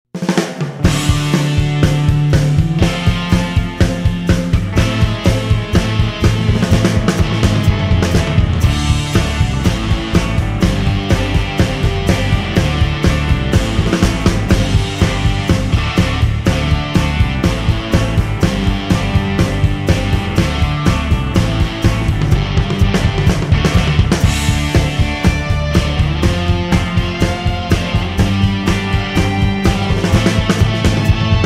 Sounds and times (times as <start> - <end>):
Rock music: 0.2 - 31.4.